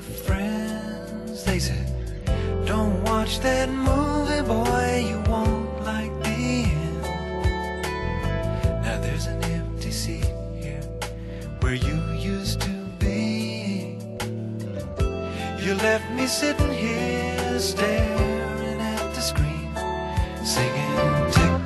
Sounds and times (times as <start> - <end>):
Music: 0.0 - 21.6.